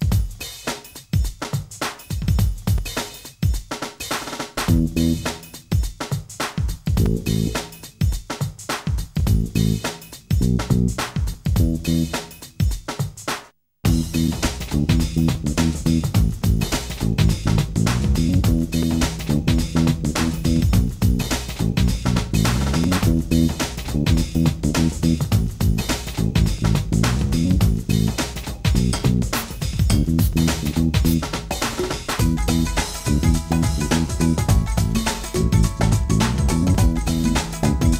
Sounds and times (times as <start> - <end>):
Soundtrack music: 32.2 - 37.9
Video game music: 32.2 - 37.9.